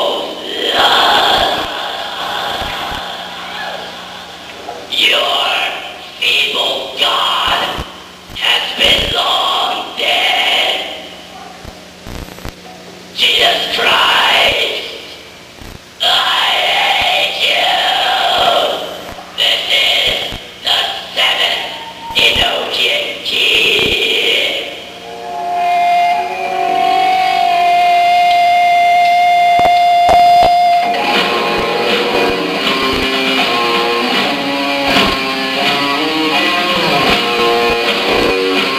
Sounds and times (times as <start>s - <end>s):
Cacophony: 0.0s - 12.6s, 13.2s - 38.7s
Speech: 4.6s - 7.8s, 8.4s - 11.6s, 12.6s - 15.1s, 16.0s - 24.8s
Music: 25.0s - 38.7s.